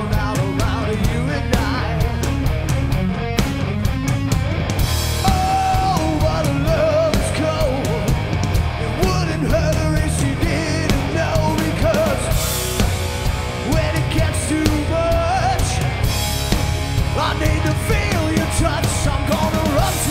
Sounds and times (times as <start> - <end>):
Music: 0.0 - 20.1.